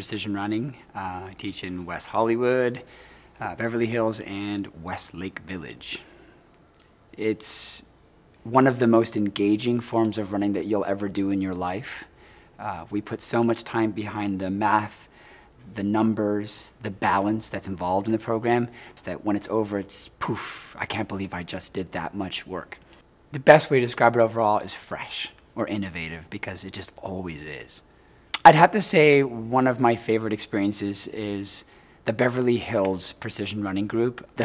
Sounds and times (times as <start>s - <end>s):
Speech: 0.0s - 6.1s, 7.1s - 34.4s.